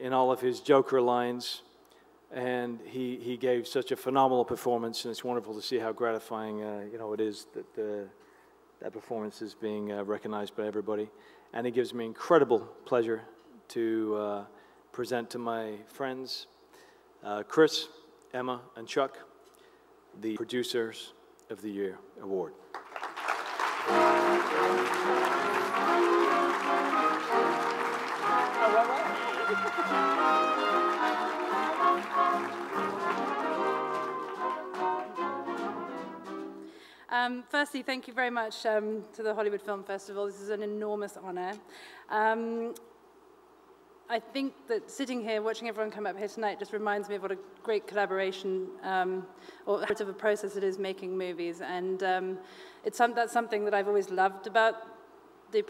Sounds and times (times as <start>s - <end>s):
Trombone: 23.8s - 36.6s.